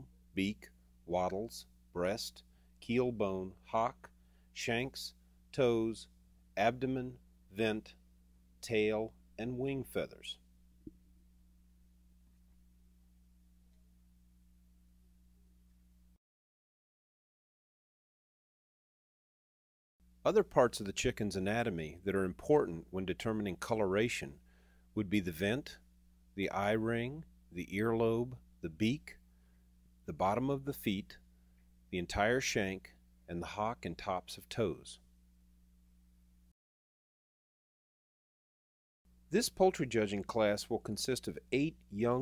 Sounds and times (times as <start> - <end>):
Speech: 0.0 - 8.0, 8.6 - 10.4, 20.3 - 24.4, 25.0 - 25.8, 26.4 - 29.2, 30.1 - 31.2, 31.9 - 35.0, 39.3 - 42.2.